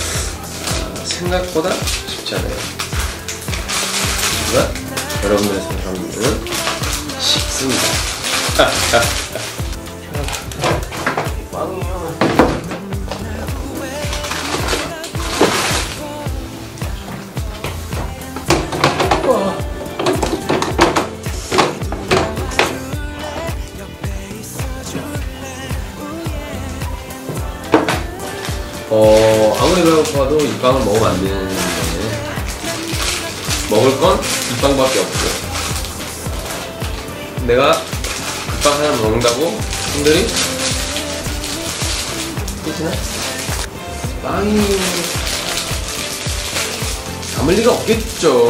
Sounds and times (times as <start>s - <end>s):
Inside, small room: 0.0s - 48.5s
Music: 0.0s - 48.5s
Speech: 0.7s - 2.7s, 4.4s - 6.5s, 11.5s - 12.2s, 28.9s - 32.2s, 33.7s - 35.5s, 37.4s - 37.8s, 38.6s - 40.4s, 44.2s - 45.2s, 47.4s - 48.5s.